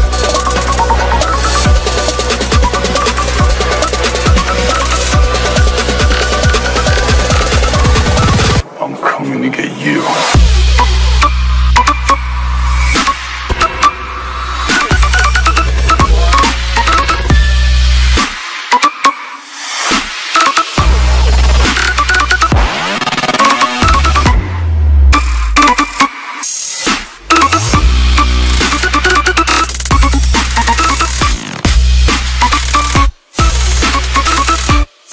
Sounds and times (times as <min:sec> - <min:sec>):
Dubstep: 0:00.0 - 0:35.1.